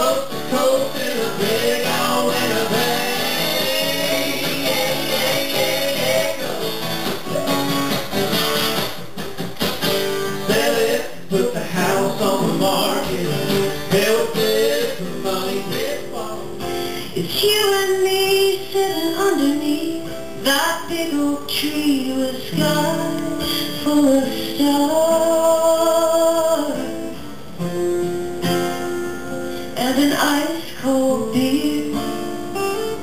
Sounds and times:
Country: 0.0 - 33.0
Female singing: 17.2 - 27.2, 29.8 - 32.3.

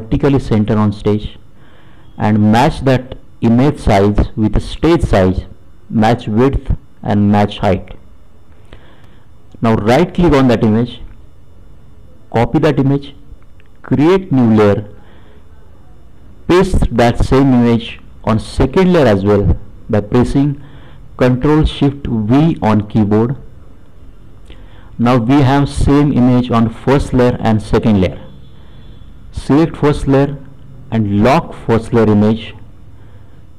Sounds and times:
Speech: 0.0 - 1.4, 2.2 - 8.0, 9.6 - 11.1, 12.1 - 20.6, 21.2 - 23.5, 25.0 - 28.3, 29.3 - 32.6.

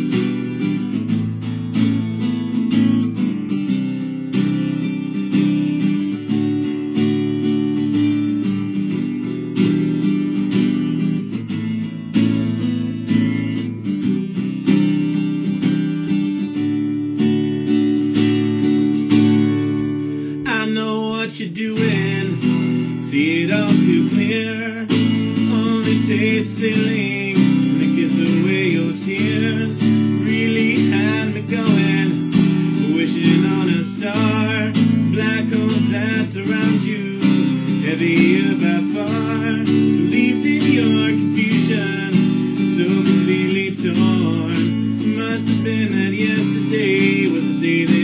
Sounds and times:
Music: 0.0 - 48.0.

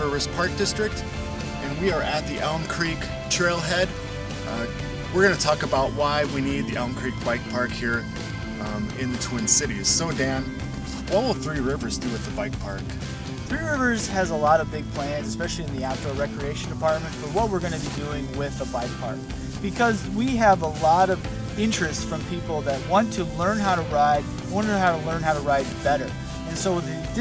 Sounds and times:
Speech: 0.0 - 1.0, 1.6 - 10.5, 11.1 - 27.2
Music: 0.0 - 27.2.

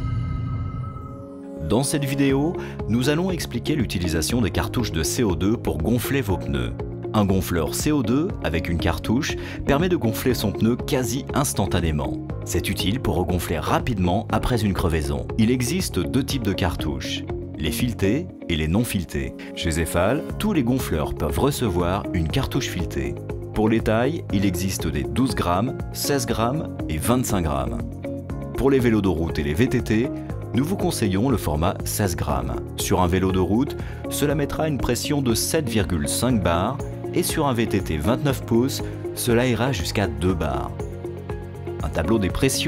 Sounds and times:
Music: 0.0 - 42.6
Speech: 1.6 - 27.9, 28.6 - 40.8, 41.8 - 42.6.

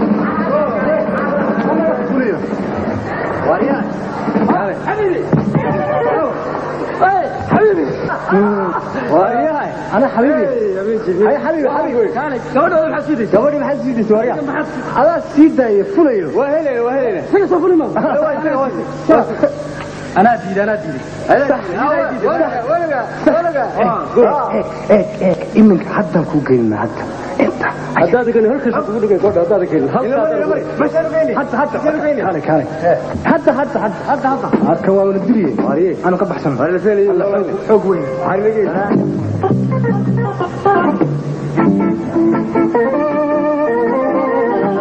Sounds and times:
Music: 0.0 - 23.5, 24.8 - 44.8
Speech: 7.0 - 19.6, 20.2 - 39.1.

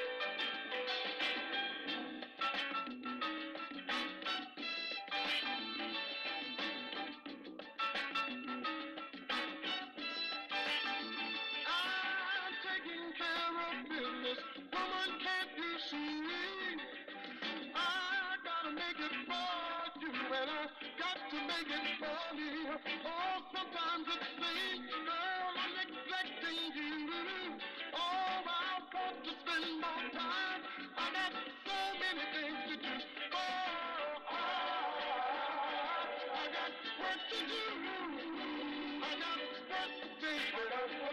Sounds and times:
Music: 0.0 - 41.1.

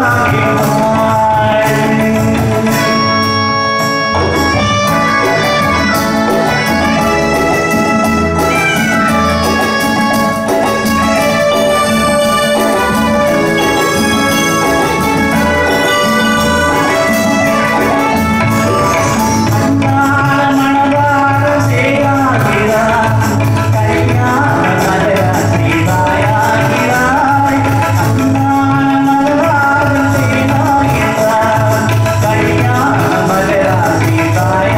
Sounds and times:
Music: 0.0 - 34.7.

